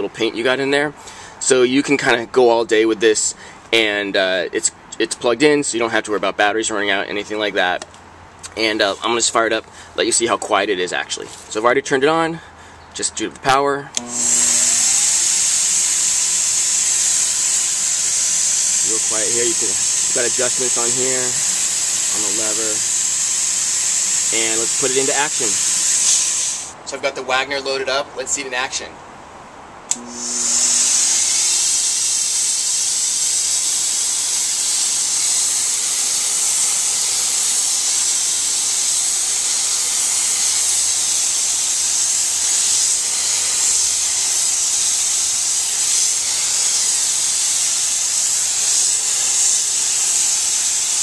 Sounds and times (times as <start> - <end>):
Power tool: 14.0 - 26.8, 29.9 - 51.0.